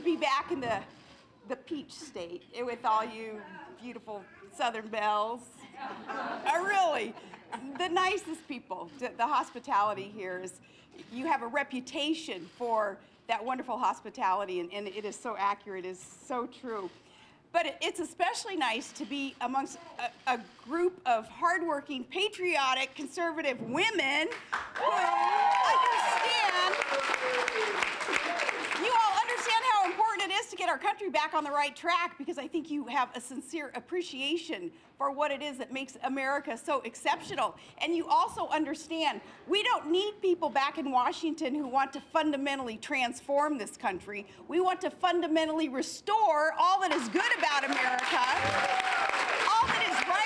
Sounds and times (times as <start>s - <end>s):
Female speech, woman speaking: 0.0s - 0.9s, 1.5s - 5.6s, 6.4s - 17.0s, 17.6s - 24.4s, 25.7s - 26.8s, 28.8s - 48.4s, 49.5s - 50.2s
Narration, monologue: 0.0s - 26.8s, 28.7s - 48.5s.